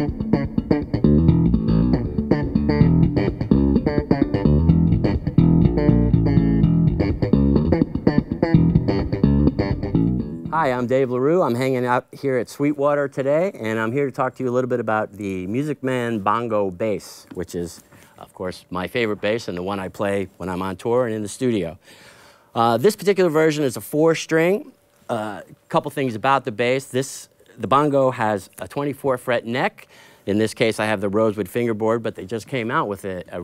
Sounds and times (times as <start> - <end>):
Speech: 10.5 - 21.8, 22.6 - 33.4.